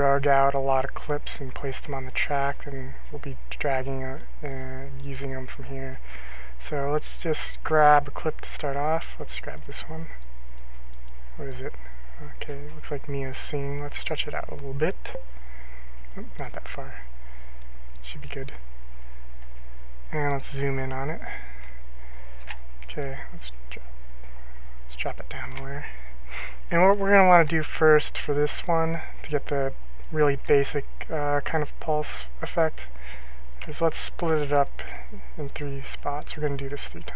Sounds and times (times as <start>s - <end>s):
Speech: 0.0s - 6.0s, 6.6s - 10.2s, 11.4s - 15.2s, 16.2s - 17.1s, 18.0s - 18.6s, 20.1s - 21.6s, 22.9s - 23.9s, 24.9s - 26.1s, 26.7s - 33.0s, 33.6s - 37.1s.